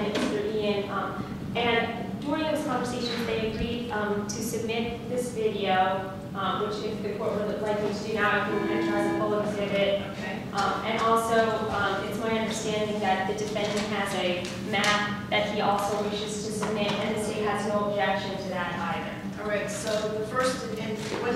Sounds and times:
Speech: 0.0s - 21.3s.

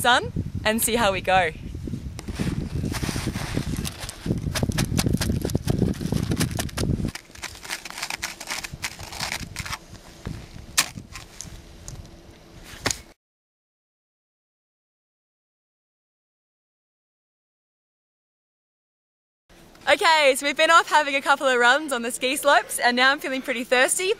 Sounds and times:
Speech: 0.0s - 1.6s, 19.9s - 24.1s.

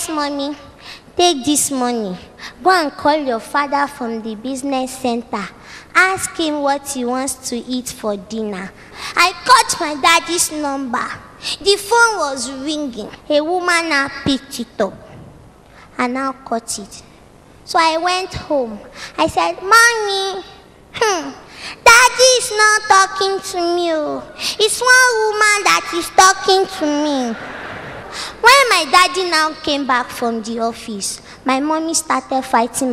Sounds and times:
Speech: 0.0s - 15.0s, 16.0s - 17.1s, 17.7s - 27.4s, 28.4s - 32.9s.

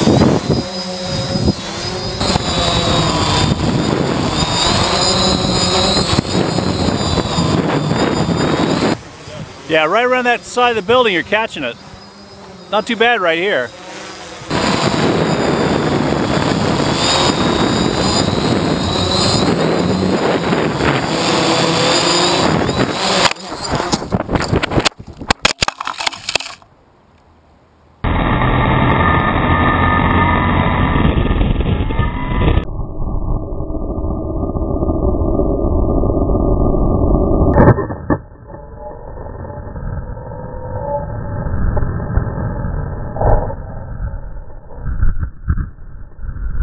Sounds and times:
Speech: 9.2s - 11.8s, 12.7s - 13.7s.

